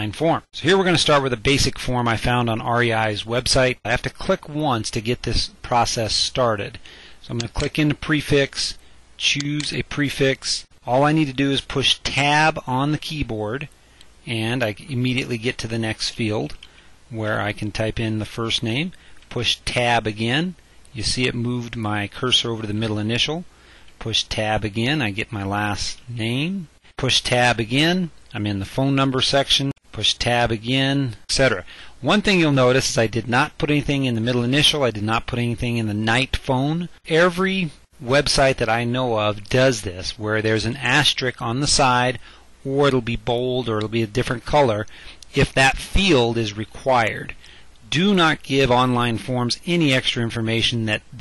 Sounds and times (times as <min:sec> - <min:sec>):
Speech: 0:00.0 - 0:51.2.